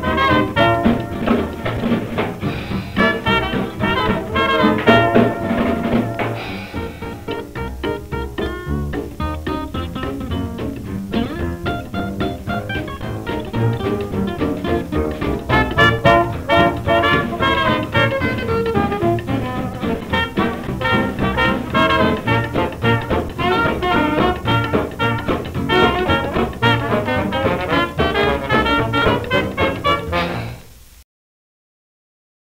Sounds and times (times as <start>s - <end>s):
Swing music: 0.0s - 30.9s.